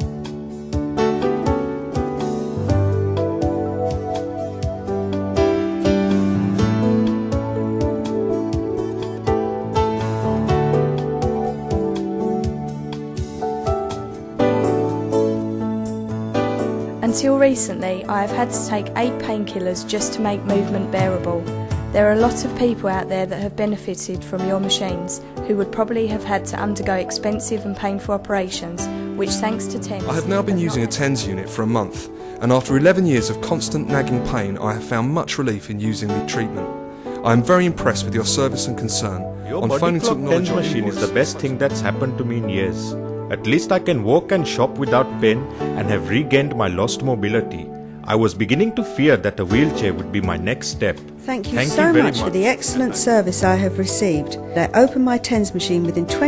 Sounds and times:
Music: 0:00.0 - 0:56.2.

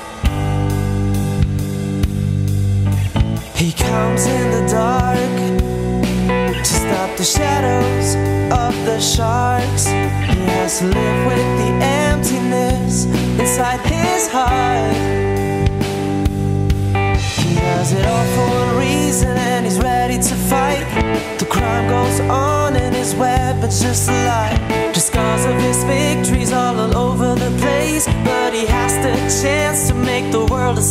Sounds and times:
Rhythm and blues: 0:00.0 - 0:30.9.

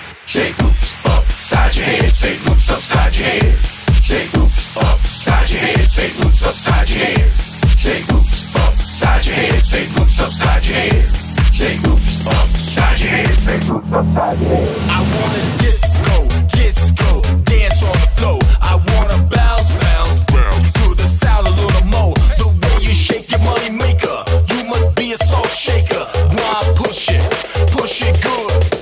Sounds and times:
Disco: 0:00.0 - 0:28.8.

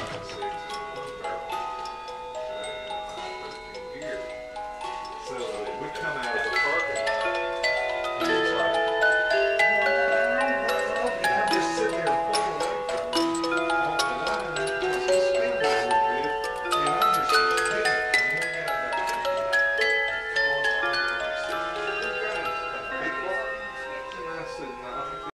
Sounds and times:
Music: 0:00.0 - 0:25.3
Speech: 0:05.2 - 0:07.3, 0:09.6 - 0:19.3, 0:20.7 - 0:25.3.

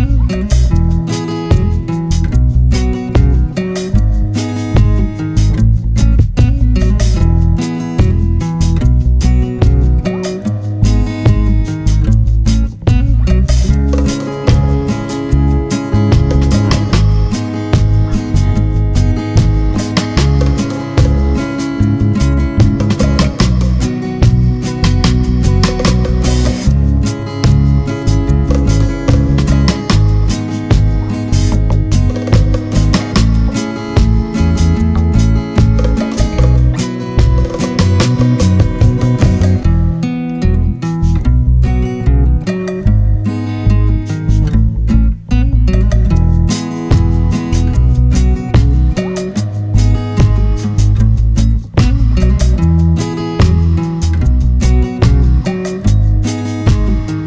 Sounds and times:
Music: 0:00.0 - 0:57.2.

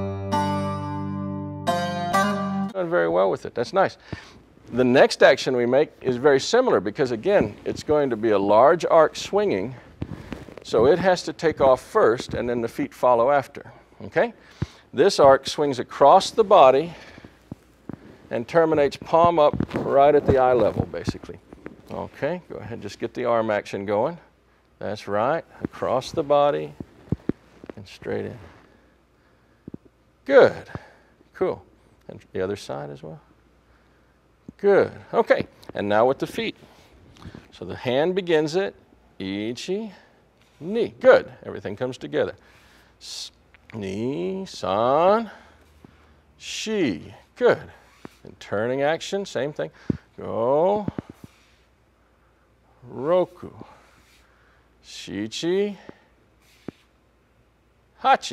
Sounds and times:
Speech: 0:02.8 - 0:04.0, 0:04.7 - 0:09.8, 0:10.6 - 0:14.4, 0:15.0 - 0:17.0, 0:18.3 - 0:26.8, 0:27.8 - 0:28.5, 0:30.3 - 0:30.8, 0:31.4 - 0:33.3, 0:34.6 - 0:36.6, 0:37.5 - 0:42.4, 0:43.0 - 0:45.4, 0:46.4 - 0:51.0, 0:52.8 - 0:53.8, 0:54.8 - 0:56.0, 0:58.0 - 0:58.3.

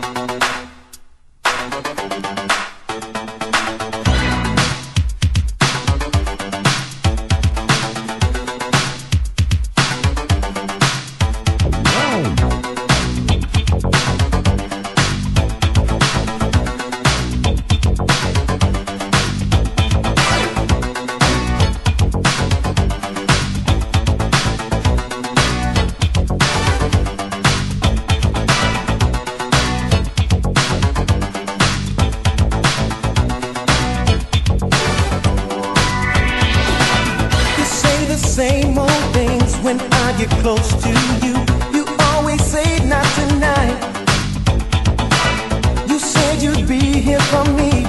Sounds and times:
Music: 0:00.0 - 0:47.8.

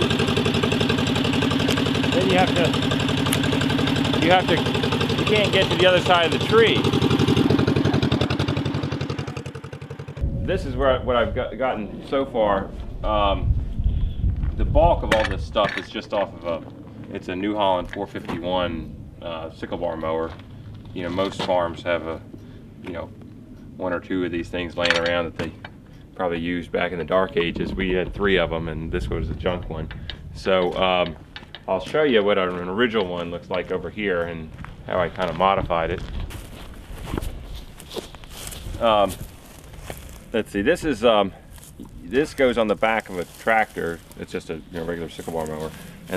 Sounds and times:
Speech: 0:02.1 - 0:02.8, 0:04.2 - 0:06.9, 0:10.4 - 0:13.5, 0:14.6 - 0:22.2, 0:22.9 - 0:23.1, 0:23.8 - 0:25.6, 0:26.2 - 0:36.1, 0:38.8 - 0:39.2, 0:40.4 - 0:41.4, 0:42.0 - 0:46.1.

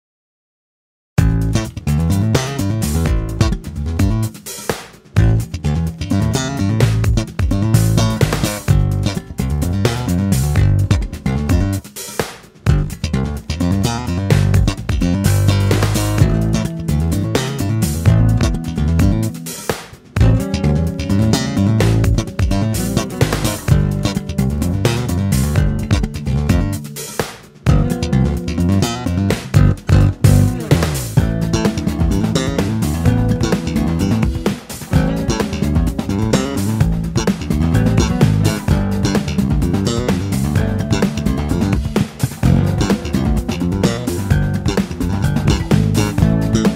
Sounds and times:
Pop music: 0:14.4 - 0:46.7.

